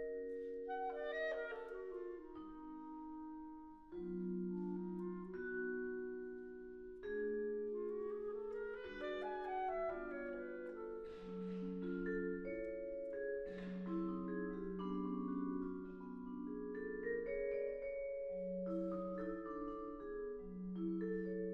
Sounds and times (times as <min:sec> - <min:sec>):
Marimba, xylophone: 0:00.0 - 0:21.5
Vibraphone: 0:00.0 - 0:21.5.